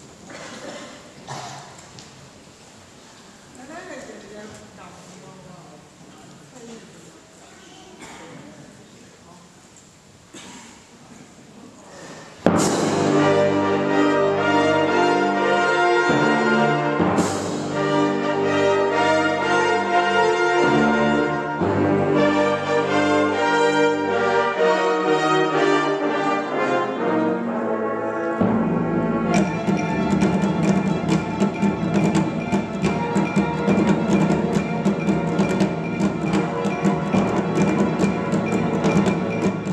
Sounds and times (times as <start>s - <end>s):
Orchestra: 11.2s - 39.7s.